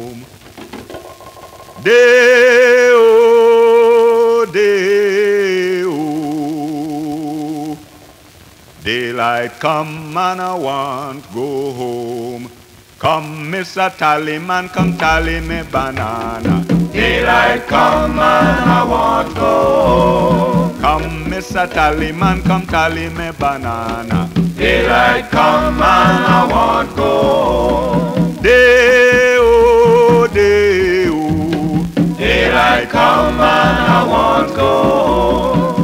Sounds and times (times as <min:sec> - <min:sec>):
Music: 0:14.8 - 0:35.8.